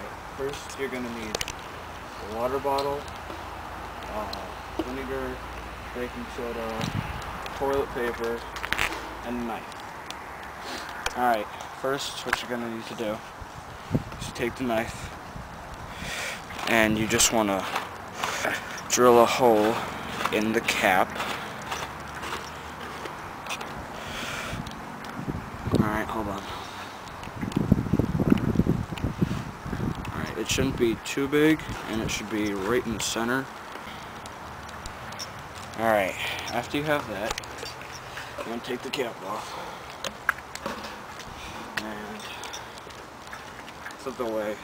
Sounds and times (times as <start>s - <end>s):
Speech: 0.0s - 1.4s, 2.2s - 3.1s, 4.1s - 6.9s, 7.6s - 8.5s, 9.2s - 9.7s, 11.1s - 13.2s, 14.2s - 15.1s, 16.6s - 17.7s, 18.9s - 21.2s, 25.8s - 26.5s, 30.1s - 33.5s, 35.8s - 37.4s, 38.4s - 39.7s, 41.8s - 42.4s, 44.0s - 44.6s.